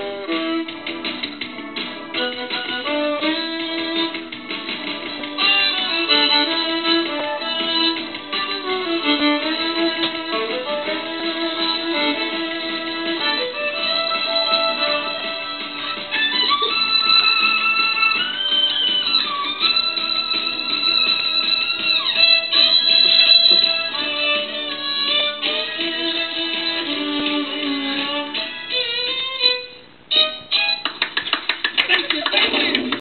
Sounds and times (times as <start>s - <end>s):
Violin, fiddle: 2.1s - 4.4s, 5.1s - 30.9s.